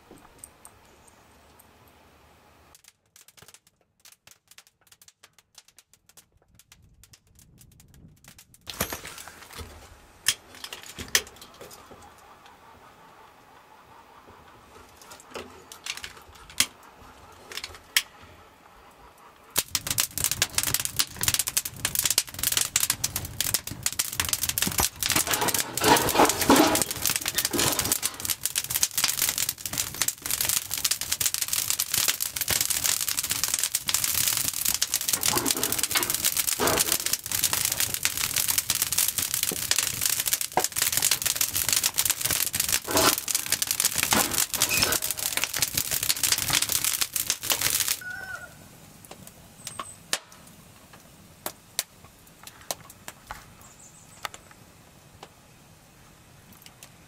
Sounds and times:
Outside, rural or natural: 0:00.0 - 0:57.0.

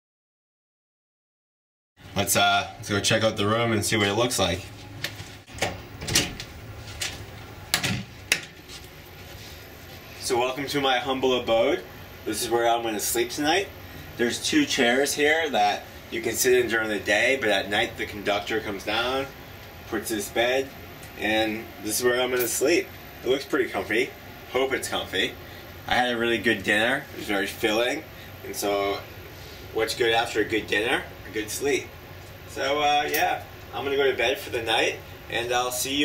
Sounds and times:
Speech: 0:02.1 - 0:04.7, 0:10.2 - 0:19.3, 0:19.9 - 0:29.1, 0:29.7 - 0:31.9, 0:32.5 - 0:36.0.

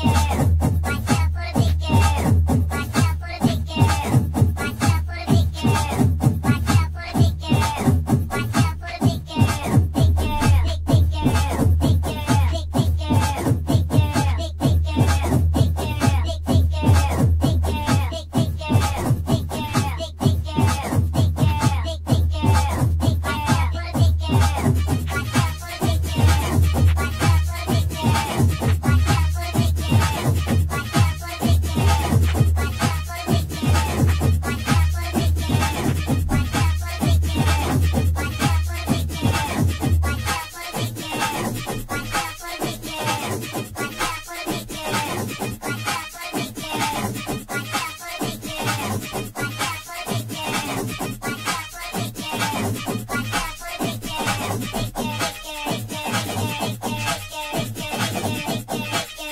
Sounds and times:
Dance music: 0:00.0 - 0:59.3.

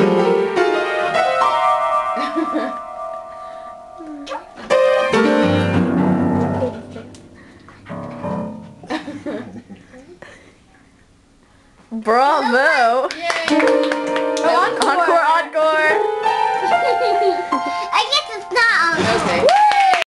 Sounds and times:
Music: 0:00.0 - 0:08.9, 0:13.5 - 0:19.0.

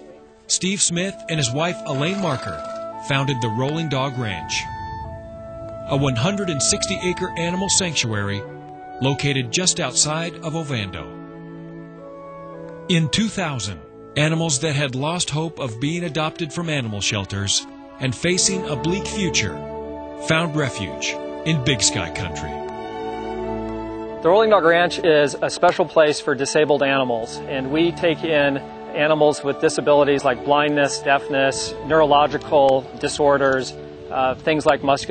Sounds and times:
Speech: 0:00.0 - 0:04.7, 0:05.9 - 0:11.1, 0:12.9 - 0:19.6, 0:20.2 - 0:22.6, 0:24.2 - 0:35.1
Music: 0:00.0 - 0:35.1.

